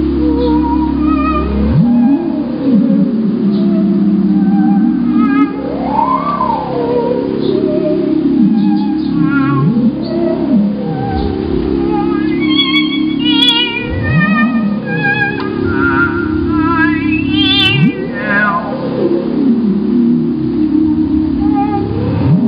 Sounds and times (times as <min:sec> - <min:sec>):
Synthesizer: 0:00.0 - 0:22.4.